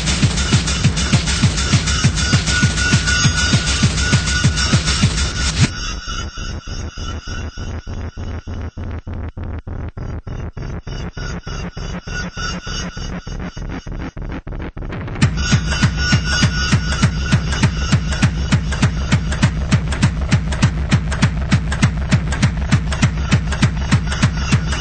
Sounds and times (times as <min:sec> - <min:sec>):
Music: 0:00.0 - 0:24.8.